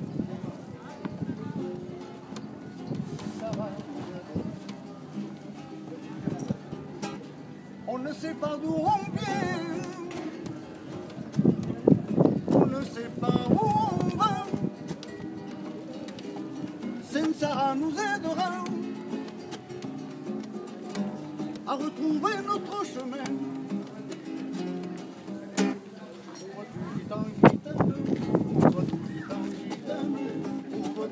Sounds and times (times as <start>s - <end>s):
Music: 1.0s - 25.9s, 27.4s - 31.1s.